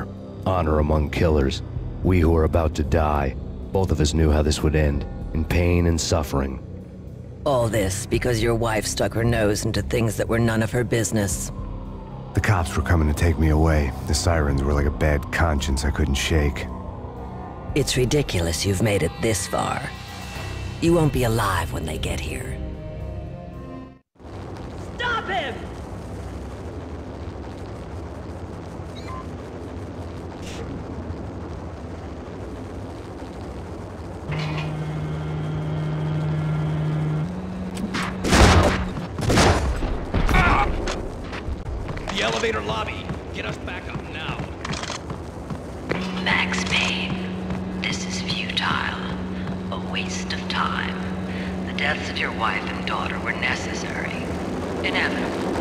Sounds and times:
Music: 0:00.0 - 0:24.1.

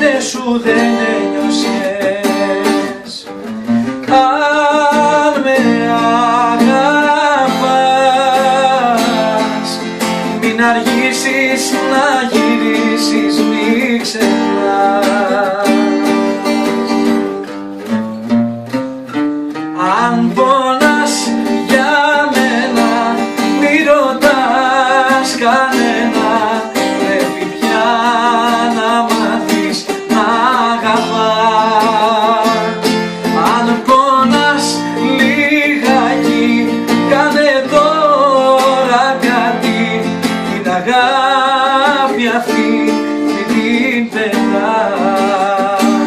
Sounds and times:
Music: 0:00.0 - 0:46.0.

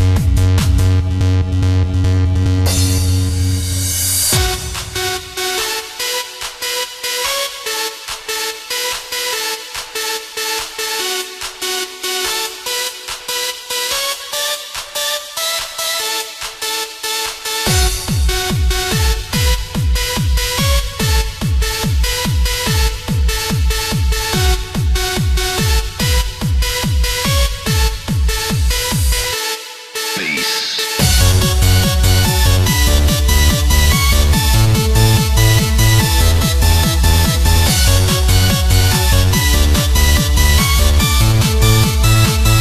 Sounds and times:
Techno: 0:00.0 - 0:42.6.

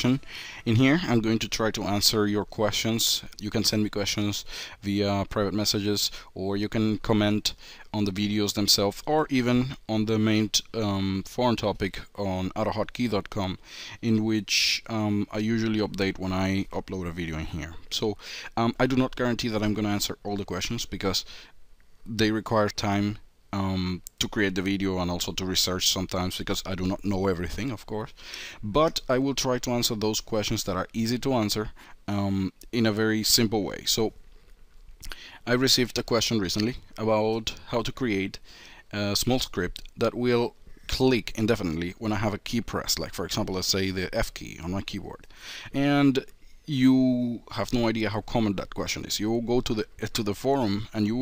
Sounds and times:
Speech: 0:00.0 - 0:21.3, 0:22.1 - 0:34.2, 0:35.4 - 0:51.2.

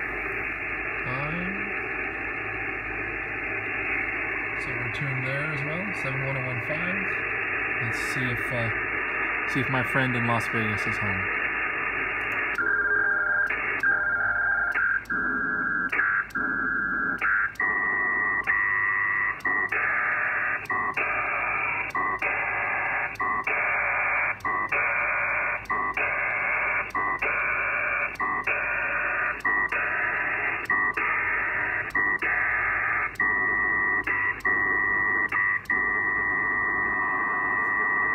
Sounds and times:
Radio: 0:00.0 - 0:38.1
Speech: 0:01.1 - 0:01.7, 0:04.6 - 0:07.2, 0:07.8 - 0:08.8, 0:09.5 - 0:11.3.

